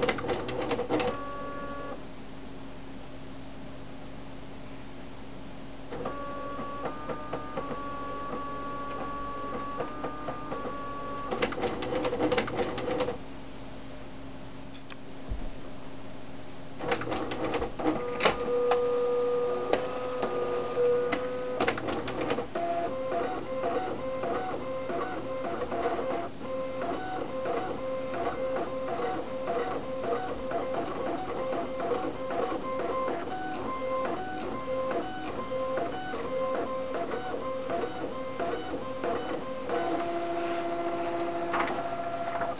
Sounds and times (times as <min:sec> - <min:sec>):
Printer: 0:00.0 - 0:02.0, 0:05.9 - 0:13.2, 0:16.8 - 0:42.5.